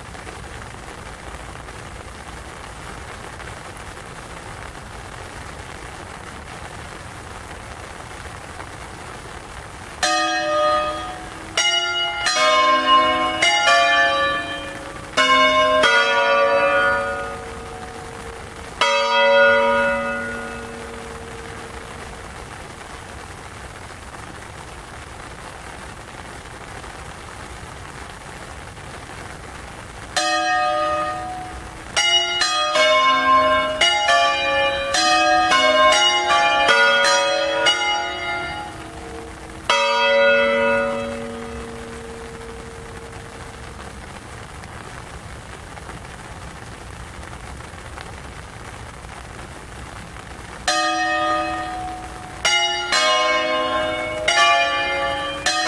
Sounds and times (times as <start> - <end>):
Change ringing (campanology): 10.0 - 18.1, 18.8 - 21.4, 30.2 - 42.6, 50.7 - 55.6
Church bell: 10.0 - 22.0, 30.2 - 43.4, 50.7 - 55.6.